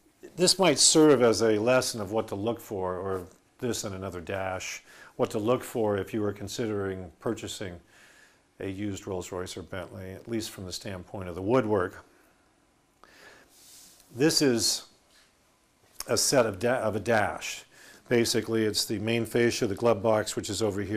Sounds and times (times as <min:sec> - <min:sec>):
Speech: 0:00.2 - 0:07.9, 0:08.6 - 0:12.1, 0:14.1 - 0:15.0, 0:16.0 - 0:20.9.